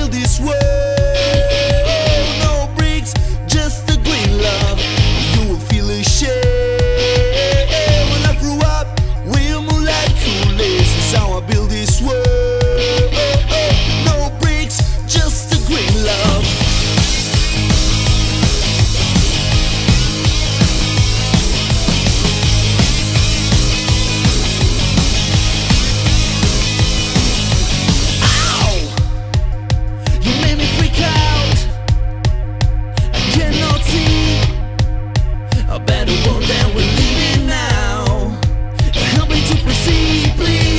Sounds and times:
Music: 0.0 - 40.7.

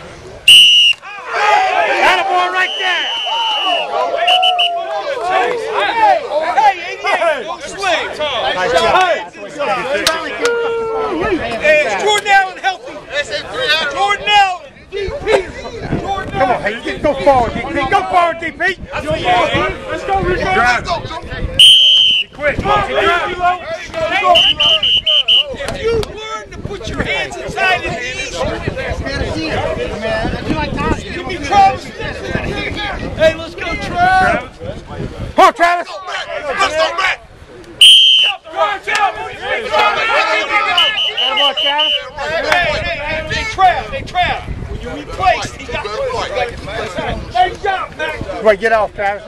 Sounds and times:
Speech: 1.1 - 21.6, 22.2 - 37.3, 38.2 - 49.2.

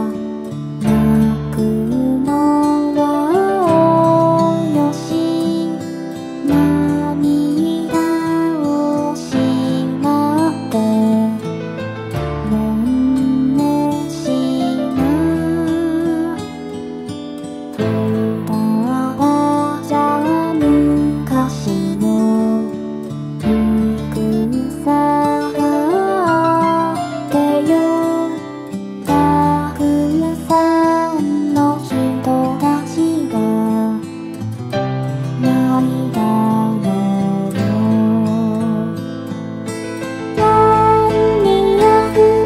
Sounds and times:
Lullaby: 0.0 - 34.5, 35.2 - 39.4, 40.2 - 42.4.

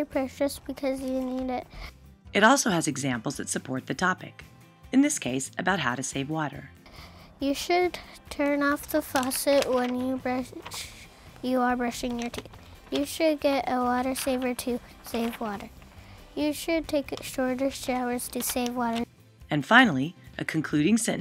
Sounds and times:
Speech: 0.0 - 1.6, 2.4 - 4.4, 5.0 - 6.7, 16.4 - 21.2
Music: 0.0 - 21.2.

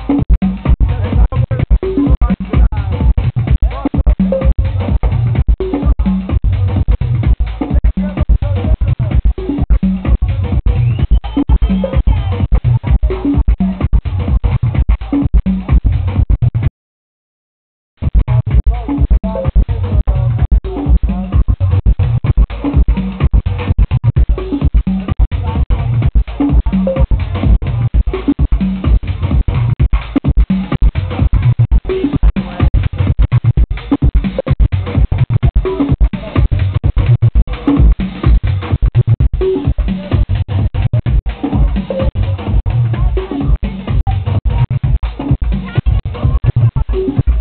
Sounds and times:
House music: 0.0 - 16.7, 18.0 - 47.4
Speech: 0.6 - 16.2, 18.3 - 22.2, 25.3 - 29.3, 30.6 - 34.5, 35.4 - 36.9, 39.6 - 47.4.

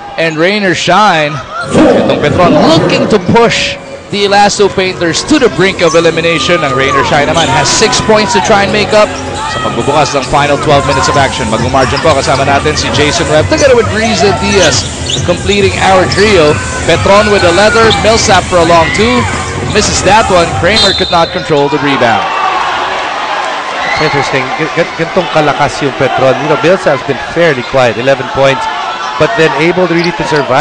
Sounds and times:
Speech: 0.2 - 22.3, 24.0 - 30.6.

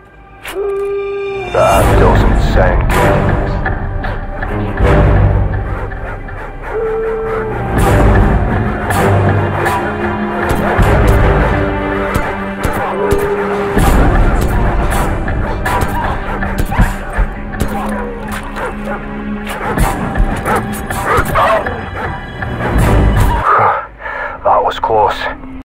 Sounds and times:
Music: 0.0 - 25.6
Bow-wow: 15.7 - 17.0, 17.6 - 22.1
Speech: 24.4 - 25.4.

